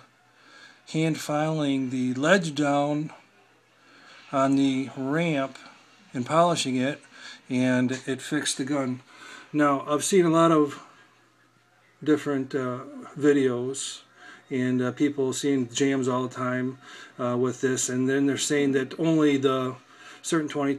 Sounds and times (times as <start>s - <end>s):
Speech: 0.9s - 3.4s, 4.3s - 11.2s, 12.0s - 20.7s.